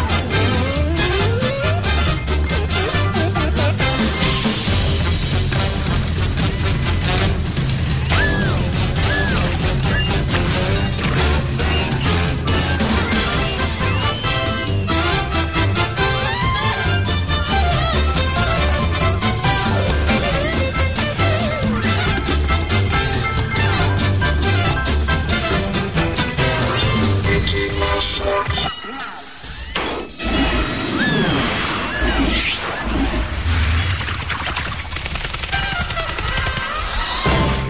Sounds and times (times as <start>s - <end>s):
Music: 0.0s - 37.7s.